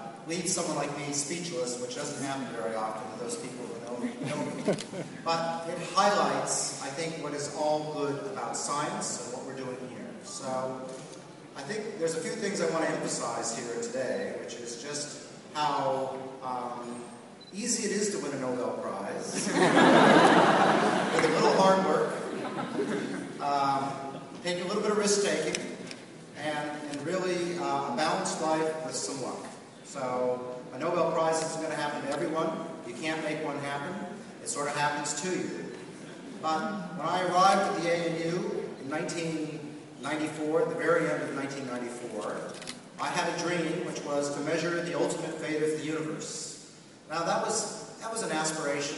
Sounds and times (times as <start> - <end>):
Male speech, man speaking: 0.0 - 4.6, 5.3 - 10.9, 11.6 - 19.5, 21.2 - 22.2, 23.4 - 25.8, 26.4 - 35.7, 36.4 - 48.9
Narration, monologue: 0.0 - 48.9.